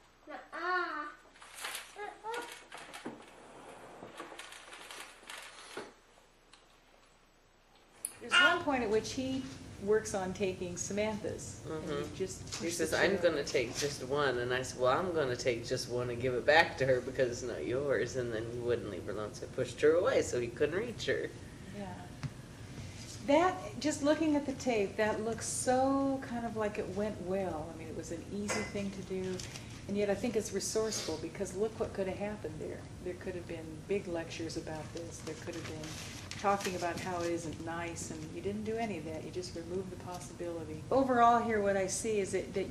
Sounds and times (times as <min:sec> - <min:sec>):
Female speech, woman speaking: 0:08.1 - 0:19.2, 0:23.2 - 0:42.7.